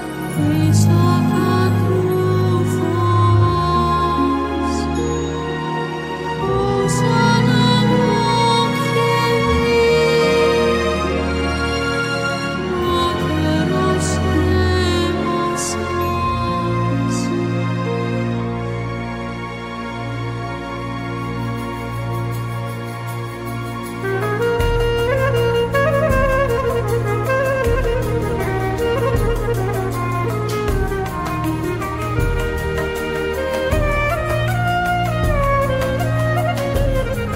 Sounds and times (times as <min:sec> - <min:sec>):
Middle Eastern music: 0:00.0 - 0:37.3.